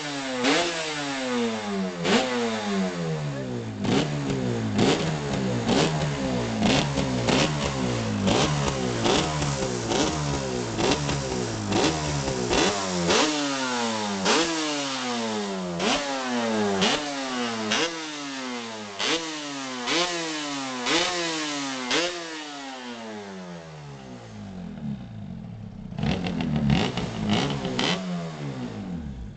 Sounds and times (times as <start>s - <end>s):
Accelerating, revving, vroom: 0.0s - 3.1s, 3.8s - 23.1s, 26.0s - 28.9s
Vehicle: 0.0s - 29.3s.